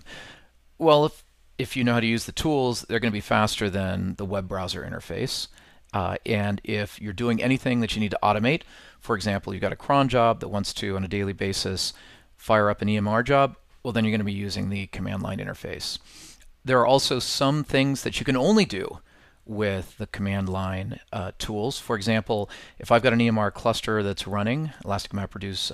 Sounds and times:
Speech: 0.8 - 16.0, 16.6 - 25.7.

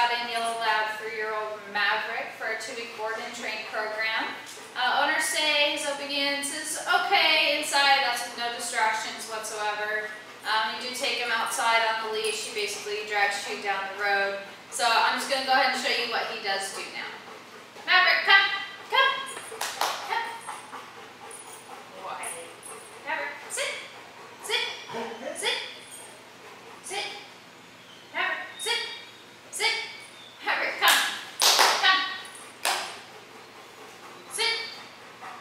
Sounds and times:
Speech: 0.0 - 17.2, 17.9 - 19.3.

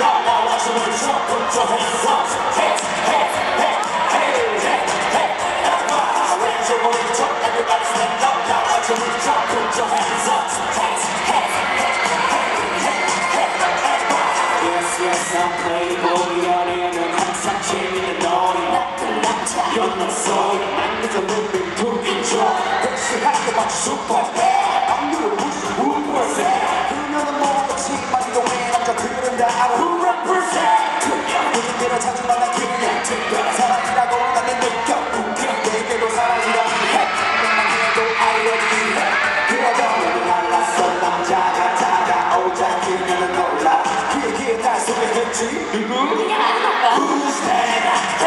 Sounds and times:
Music: 0.0 - 48.2.

